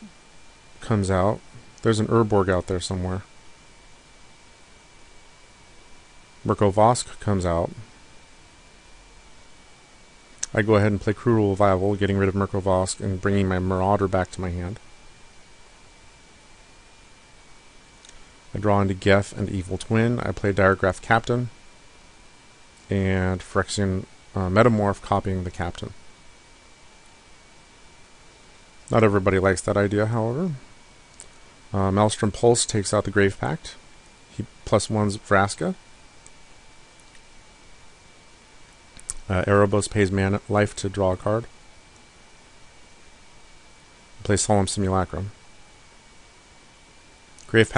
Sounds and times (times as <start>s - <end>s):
Speech: 0.8s - 3.3s, 6.4s - 7.9s, 10.4s - 14.8s, 18.5s - 21.6s, 22.9s - 26.0s, 28.9s - 30.7s, 31.7s - 35.8s, 39.2s - 41.5s, 44.2s - 45.4s, 47.4s - 47.7s.